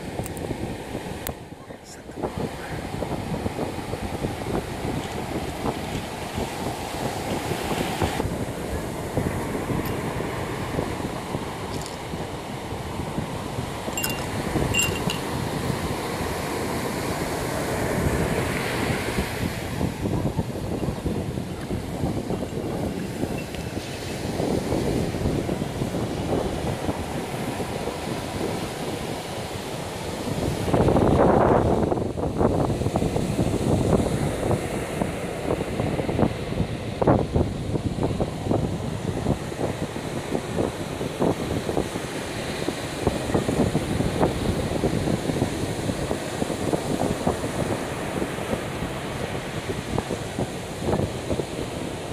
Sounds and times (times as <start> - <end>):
Chink, clink: 14.0 - 15.3.